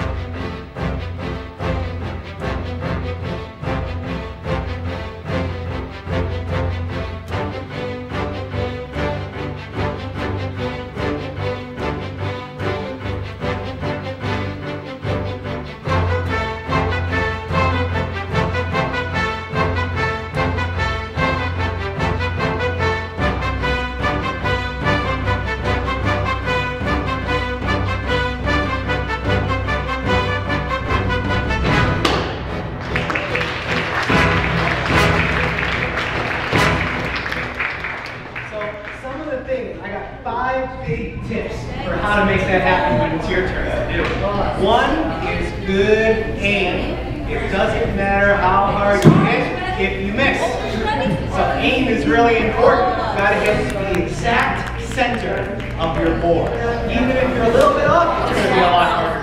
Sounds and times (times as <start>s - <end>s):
Music: 0.0s - 59.2s.